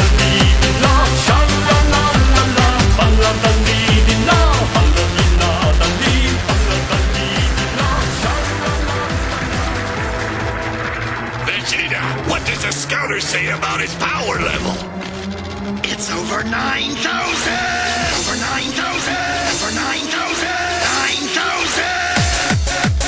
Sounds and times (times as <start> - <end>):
Music: 0.0 - 23.0
Speech: 11.4 - 14.8, 15.8 - 22.2.